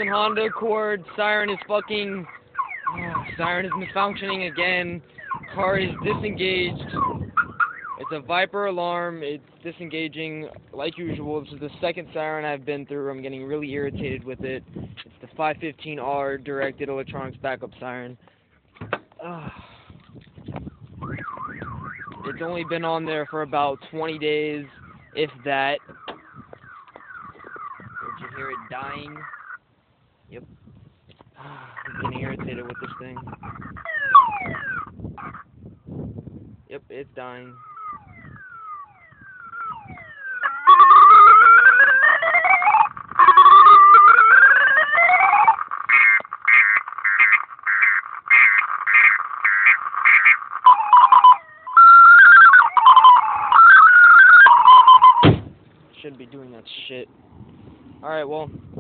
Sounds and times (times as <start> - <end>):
Speech: 0.0 - 2.3, 2.9 - 7.0, 8.0 - 14.6, 15.2 - 18.2, 22.2 - 25.8, 28.0 - 29.3, 31.4 - 33.3, 36.7 - 37.6, 56.0 - 57.1, 58.0 - 58.6
Siren: 0.0 - 8.5, 20.6 - 29.6, 31.8 - 35.6, 37.3 - 55.4.